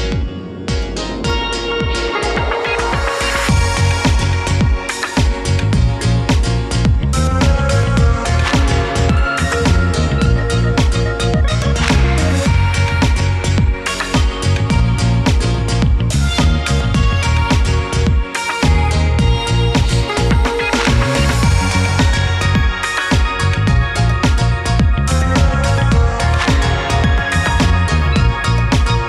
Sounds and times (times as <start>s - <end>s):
Music: 0.0s - 29.0s.